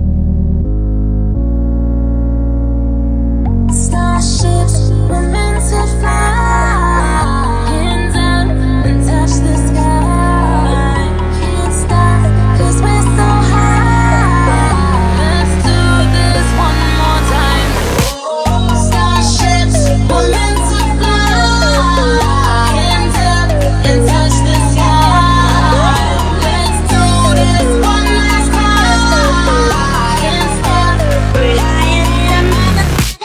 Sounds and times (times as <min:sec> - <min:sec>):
Music: 0:00.0 - 0:33.2.